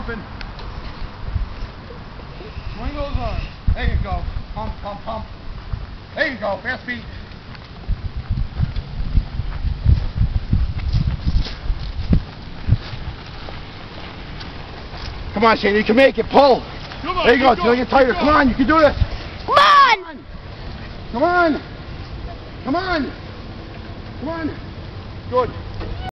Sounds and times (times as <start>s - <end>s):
Speech: 15.4s - 19.0s.